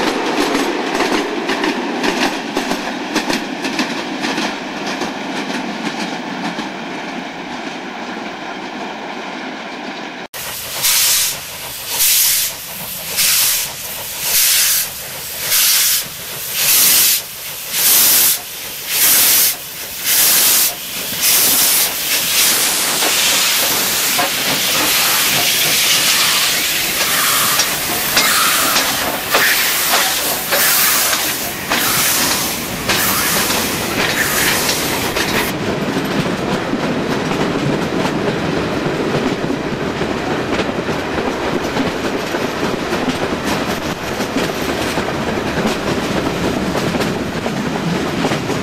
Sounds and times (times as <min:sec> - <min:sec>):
Railroad car, train wagon: 0:00.0 - 0:48.6
Train: 0:00.0 - 0:48.6.